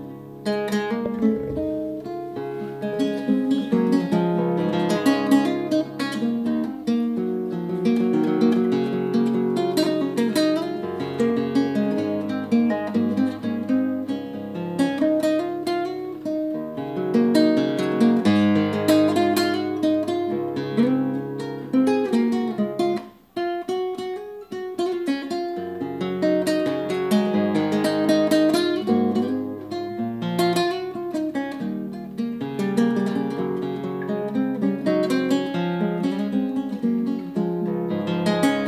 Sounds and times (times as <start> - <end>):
Acoustic guitar: 0.0 - 38.6.